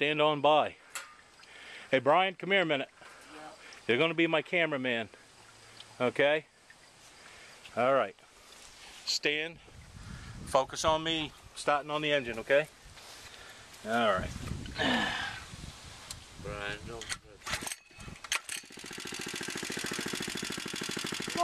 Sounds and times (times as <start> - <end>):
Speech: 6.0 - 6.5, 10.5 - 12.7, 16.5 - 17.4.